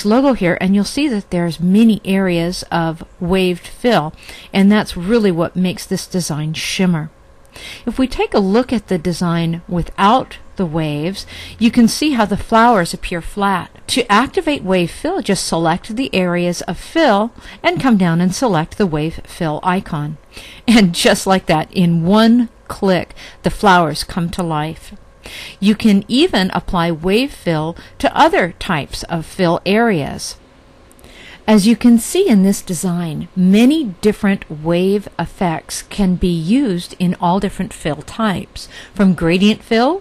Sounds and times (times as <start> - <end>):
Speech: 0.0 - 7.1, 7.9 - 25.0, 25.6 - 30.4, 31.5 - 40.0.